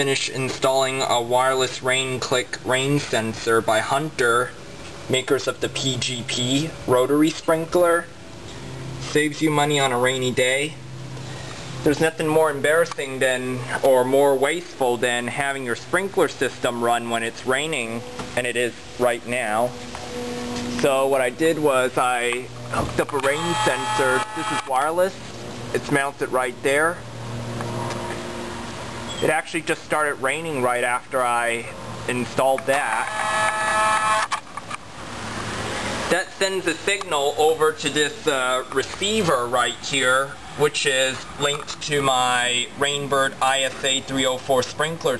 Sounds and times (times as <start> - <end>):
Speech: 0.0 - 8.2, 9.0 - 10.8, 11.8 - 19.8, 20.8 - 27.0, 29.2 - 33.1, 36.1 - 45.1.